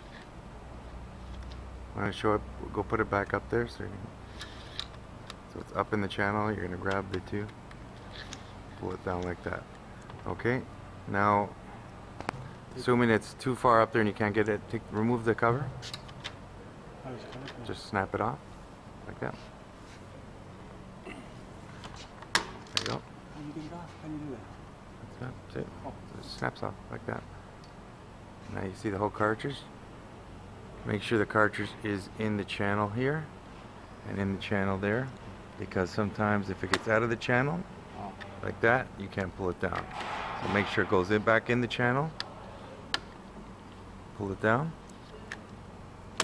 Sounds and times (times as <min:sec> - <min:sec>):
Speech: 0:02.0 - 0:04.1, 0:05.5 - 0:07.6, 0:08.8 - 0:11.5, 0:12.7 - 0:15.8, 0:17.0 - 0:18.4, 0:19.1 - 0:19.5, 0:22.8 - 0:24.5, 0:25.2 - 0:27.3, 0:28.5 - 0:29.7, 0:30.8 - 0:33.3, 0:34.0 - 0:42.2, 0:44.2 - 0:45.3.